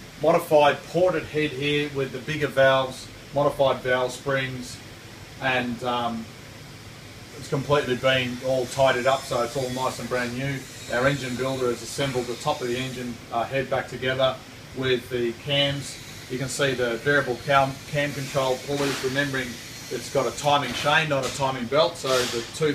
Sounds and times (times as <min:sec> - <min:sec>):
Speech: 0:00.2 - 0:04.8, 0:05.4 - 0:06.3, 0:07.4 - 0:22.7.